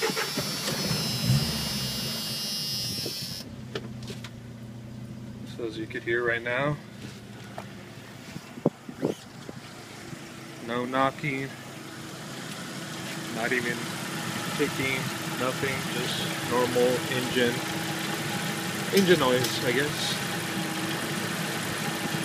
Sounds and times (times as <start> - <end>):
Car: 0.0 - 22.2
Engine: 0.0 - 22.2
Speech: 5.5 - 6.8, 10.6 - 11.6, 13.4 - 13.8, 14.6 - 17.6, 18.9 - 20.2.